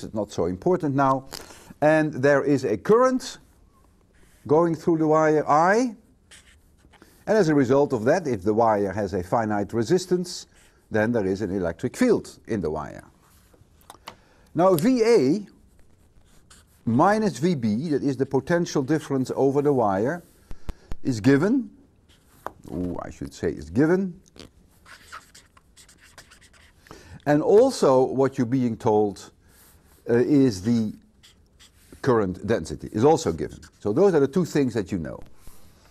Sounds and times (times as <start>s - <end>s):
Speech: 0.0s - 3.4s, 4.4s - 6.0s, 7.3s - 13.1s, 14.6s - 15.5s, 16.9s - 20.3s, 21.0s - 21.8s, 22.7s - 24.2s, 27.2s - 29.4s, 30.1s - 31.0s, 32.0s - 35.3s
Inside, small room: 0.0s - 35.9s
Writing: 3.4s - 4.5s, 6.2s - 7.6s, 15.6s - 20.6s, 22.0s - 22.9s, 24.3s - 26.9s, 29.5s - 34.3s.